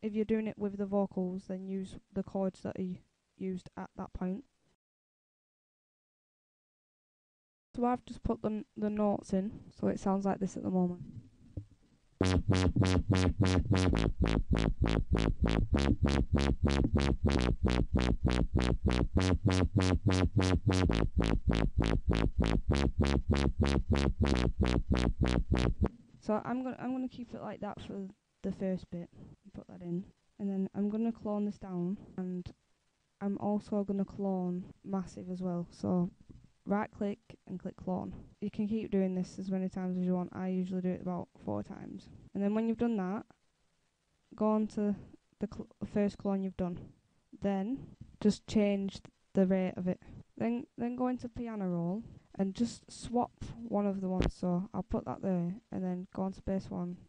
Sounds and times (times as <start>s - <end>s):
Speech: 0.0s - 4.5s, 7.8s - 11.2s, 26.2s - 32.6s, 33.2s - 43.3s, 44.4s - 57.0s
Dubstep: 12.2s - 25.9s.